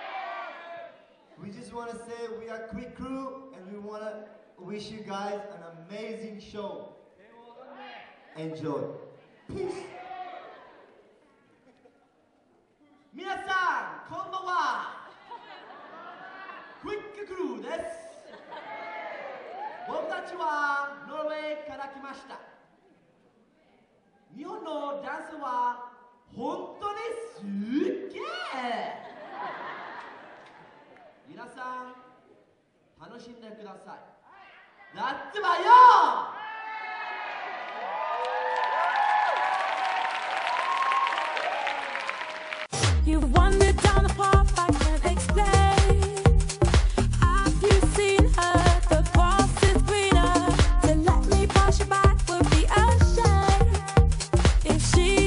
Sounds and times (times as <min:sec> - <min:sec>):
Male speech, man speaking: 0:01.4 - 0:10.0, 0:13.1 - 0:15.1, 0:16.8 - 0:18.3, 0:19.9 - 0:22.6, 0:24.3 - 0:29.0, 0:31.3 - 0:32.2, 0:33.0 - 0:34.1, 0:34.9 - 0:36.2.